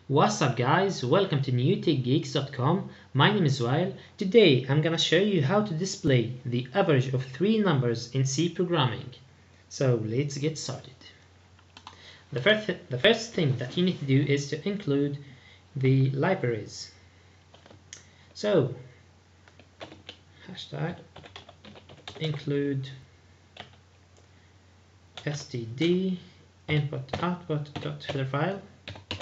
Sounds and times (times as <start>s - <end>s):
Speech: 0.0s - 11.2s, 12.3s - 17.0s, 18.4s - 18.9s, 20.4s - 21.1s, 22.1s - 23.1s, 25.2s - 28.7s
Inside, small room: 0.0s - 29.2s.